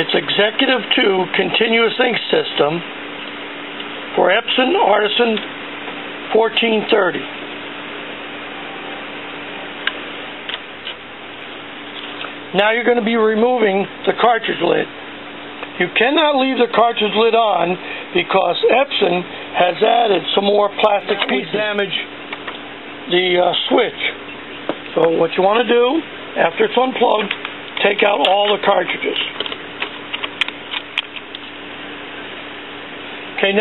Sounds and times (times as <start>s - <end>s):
Speech: 0.0s - 2.9s, 4.1s - 5.5s, 6.3s - 7.3s, 12.5s - 15.0s, 15.8s - 22.1s, 23.0s - 24.2s, 24.9s - 29.4s, 33.4s - 33.6s.